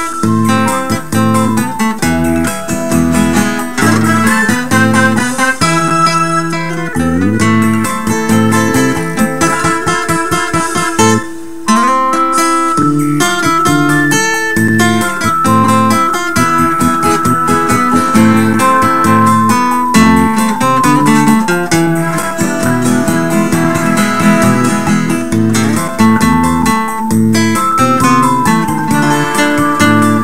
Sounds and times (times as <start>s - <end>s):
Music: 0.0s - 30.2s.